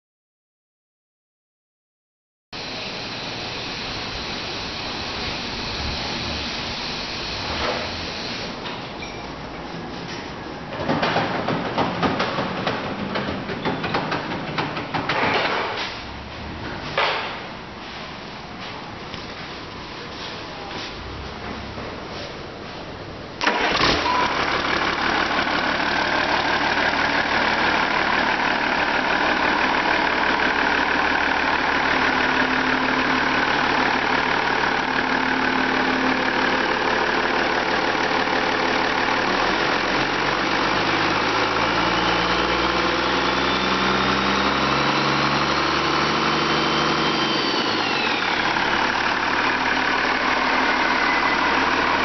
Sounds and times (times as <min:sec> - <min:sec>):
Medium engine (mid frequency): 0:02.6 - 0:52.0
Idling: 0:23.4 - 0:52.0.